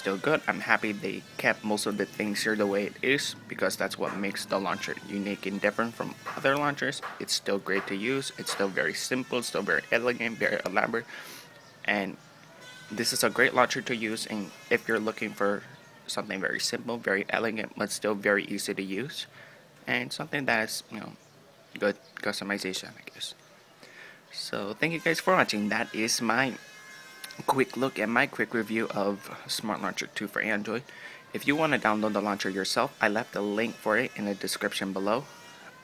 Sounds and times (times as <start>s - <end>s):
Speech: 0.0s - 11.1s, 11.9s - 12.2s, 13.0s - 19.3s, 19.9s - 21.2s, 21.8s - 23.4s, 24.3s - 26.6s, 27.3s - 35.3s.